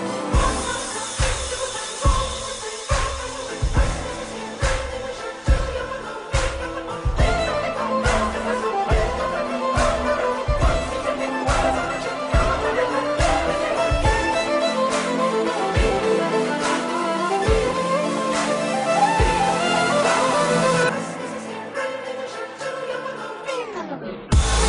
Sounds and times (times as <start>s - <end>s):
Music: 0.0s - 24.6s.